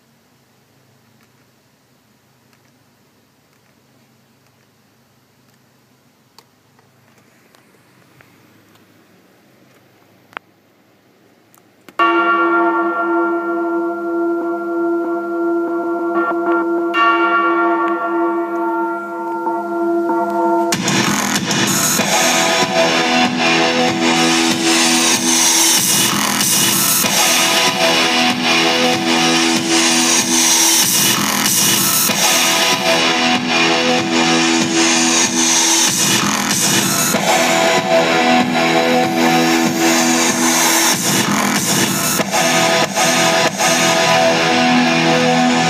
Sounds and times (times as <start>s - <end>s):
Music: 19.7s - 45.6s.